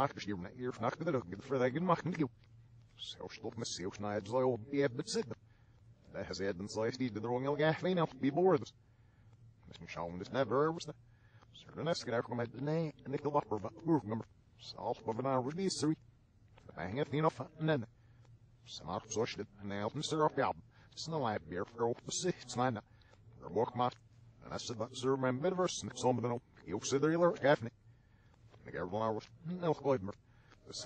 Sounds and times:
Male speech, man speaking: 0.0s - 5.4s, 6.0s - 8.8s, 9.6s - 16.0s, 16.6s - 18.0s, 18.6s - 27.8s, 28.5s - 30.8s
Narration, monologue: 0.0s - 30.8s.

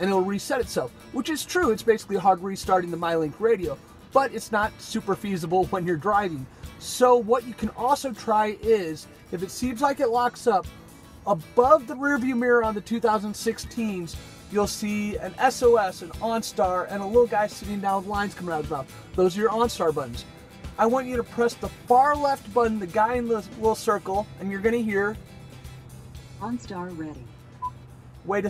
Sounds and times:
Speech: 0.0s - 10.6s, 11.3s - 20.2s, 20.8s - 25.2s, 26.4s - 27.3s, 28.3s - 28.4s
Music: 0.0s - 28.4s.

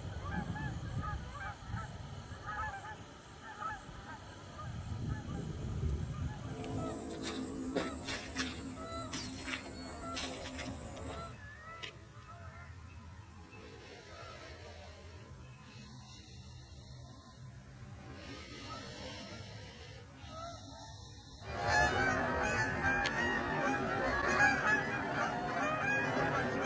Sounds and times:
Quack: 0.2s - 5.4s, 6.2s - 12.7s, 20.2s - 26.6s.

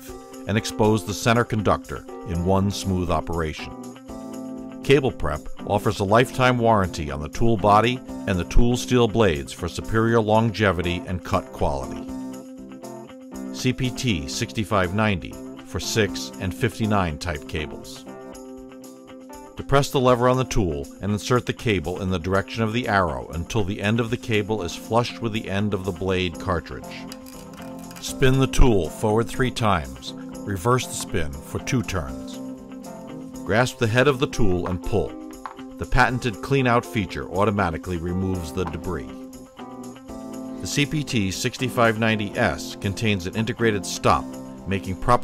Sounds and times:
Music: 0.0s - 45.2s
Speech: 0.5s - 3.7s, 4.8s - 12.0s, 13.6s - 18.0s, 19.6s - 27.1s, 28.0s - 32.4s, 33.4s - 35.2s, 35.8s - 39.2s, 40.6s - 45.2s.

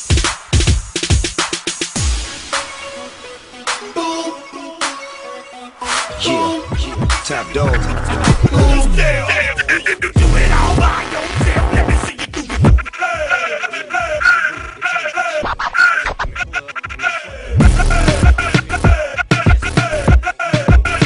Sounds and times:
Funk: 6.1s - 13.2s, 15.4s - 21.0s.

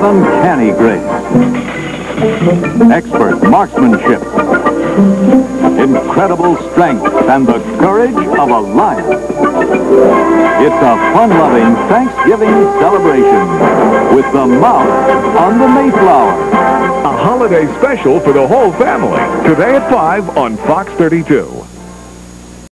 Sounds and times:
Speech: 0.0s - 1.0s, 2.6s - 4.4s, 5.8s - 9.1s, 10.6s - 13.4s, 14.1s - 16.4s, 17.0s - 21.7s
Music: 0.0s - 22.7s.

